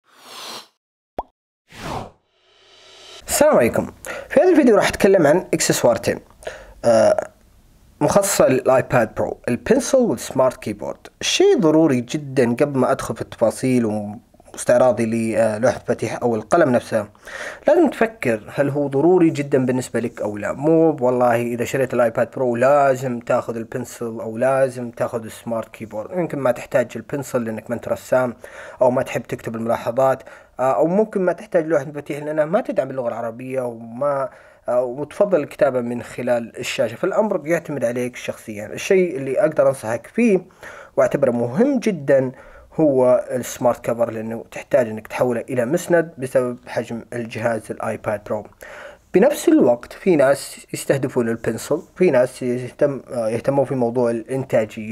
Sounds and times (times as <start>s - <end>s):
Speech: 3.2s - 7.4s, 8.0s - 54.9s.